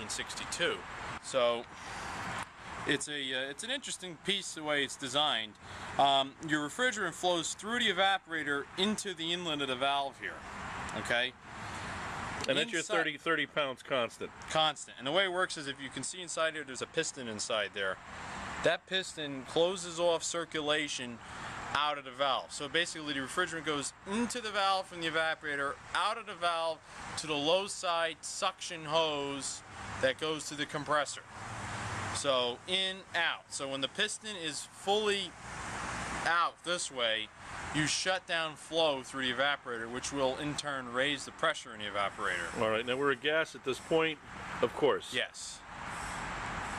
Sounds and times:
Speech: 0:00.0 - 0:01.7, 0:02.9 - 0:11.4, 0:12.4 - 0:18.0, 0:18.6 - 0:31.3, 0:32.2 - 0:35.4, 0:36.2 - 0:45.6.

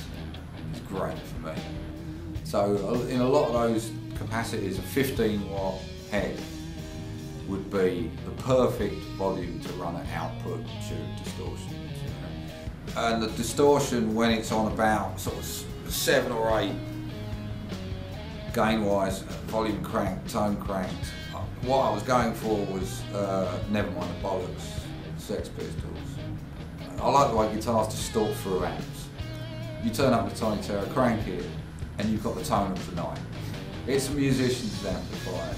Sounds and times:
Speech: 0:00.0 - 0:01.7, 0:02.4 - 0:06.5, 0:07.4 - 0:12.3, 0:12.9 - 0:16.8, 0:18.5 - 0:26.2, 0:26.9 - 0:29.2, 0:29.8 - 0:33.3, 0:33.9 - 0:35.5.

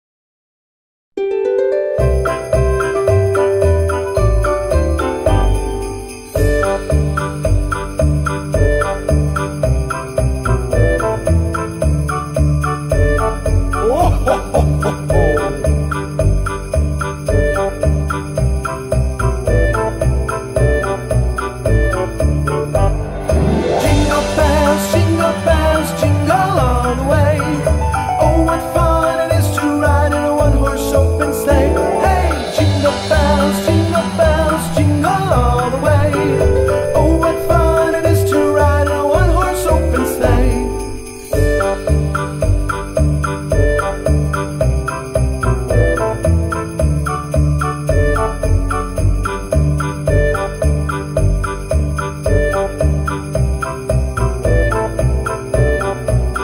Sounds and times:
Jingle bell: 0:02.0 - 0:56.4
Jingle, tinkle: 0:02.0 - 0:56.4.

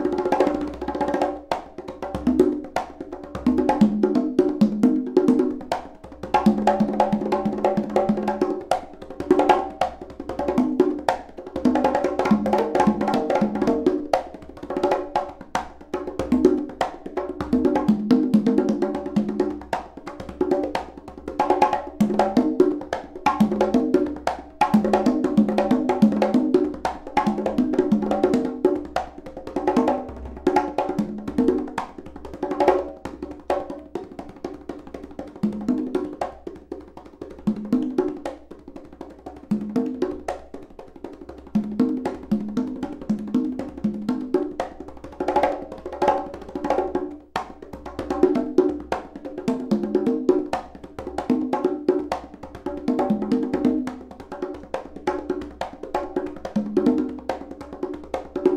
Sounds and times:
Drum: 0:00.0 - 0:36.7, 0:41.5 - 0:58.5.

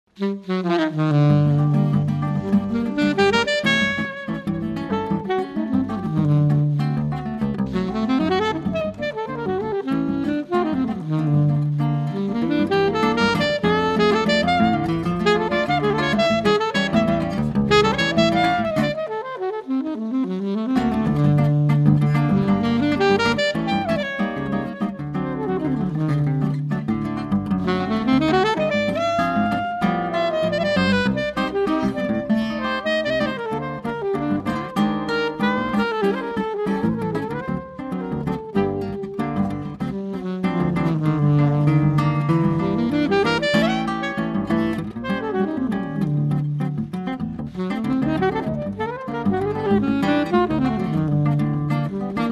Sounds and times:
Saxophone: 0:00.1 - 0:52.3.

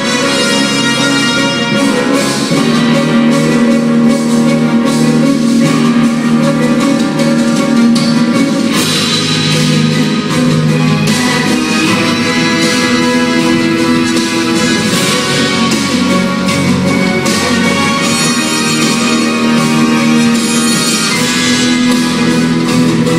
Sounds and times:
Music: 0:00.0 - 0:23.1.

